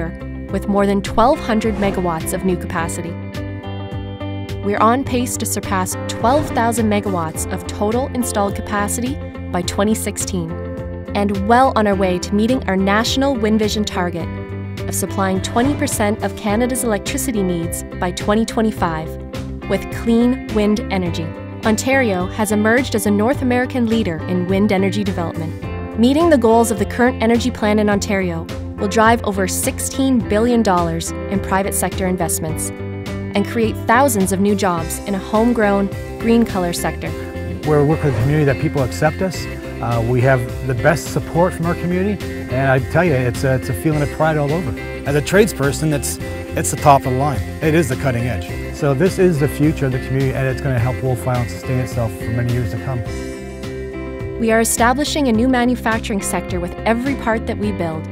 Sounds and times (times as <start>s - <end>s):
Speech: 0.0s - 3.2s, 4.7s - 10.5s, 11.2s - 14.3s, 14.9s - 19.1s, 19.7s - 32.7s, 33.4s - 53.1s, 54.4s - 58.1s
Music: 0.0s - 58.1s.